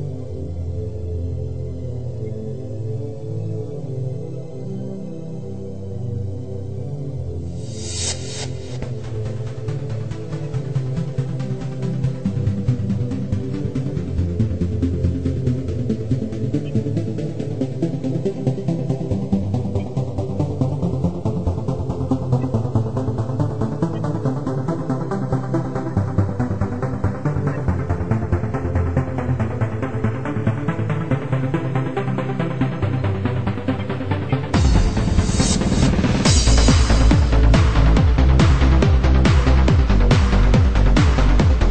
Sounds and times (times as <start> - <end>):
Electronic music: 0.0 - 41.7.